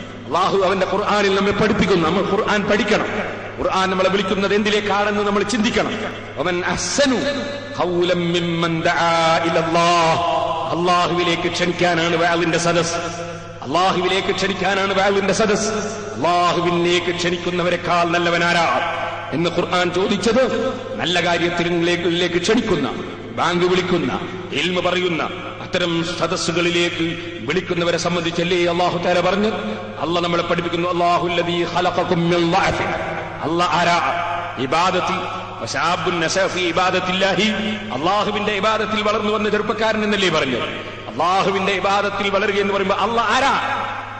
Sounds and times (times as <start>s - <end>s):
Male speech, man speaking: 0.0s - 43.7s
Narration, monologue: 0.0s - 44.2s.